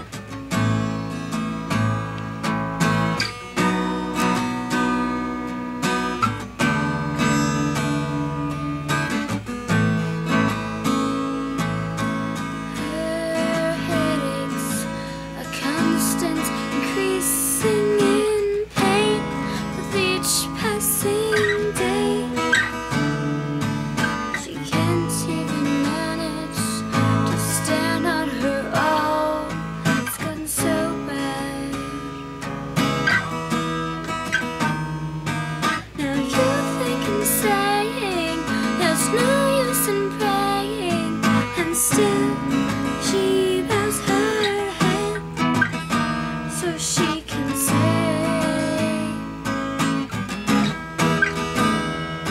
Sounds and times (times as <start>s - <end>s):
Strum: 0.0s - 52.3s
Child singing: 12.7s - 23.4s, 24.4s - 32.1s, 36.0s - 45.3s, 46.5s - 49.3s.